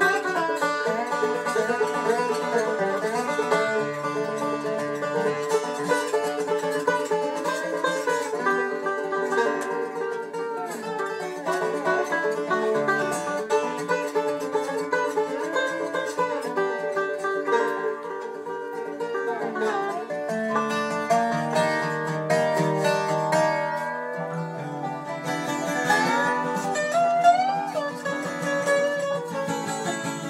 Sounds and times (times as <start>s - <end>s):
Banjo: 0.0s - 30.3s
Bluegrass: 0.0s - 30.3s.